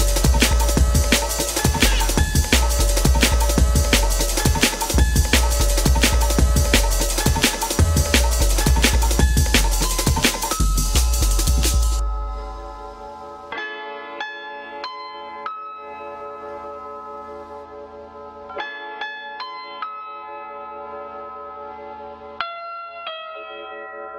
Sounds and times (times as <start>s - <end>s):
Music: 0.0s - 24.1s.